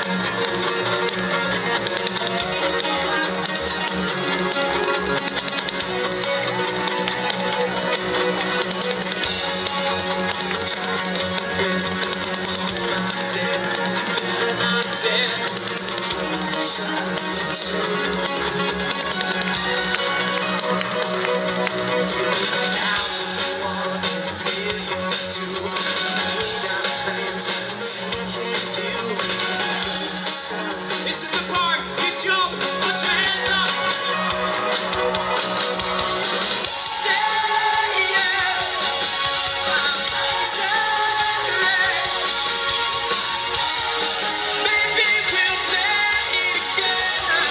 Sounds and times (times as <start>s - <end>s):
Soundtrack music: 0.0s - 47.5s.